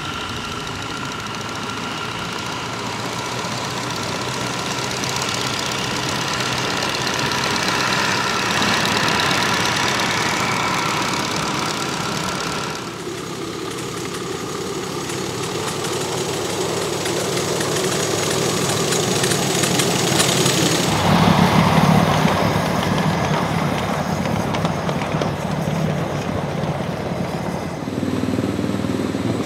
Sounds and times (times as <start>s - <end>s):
Rattle: 0.0s - 27.8s
Engine: 0.0s - 29.4s
Outside, rural or natural: 0.0s - 29.4s
Train: 0.0s - 29.4s.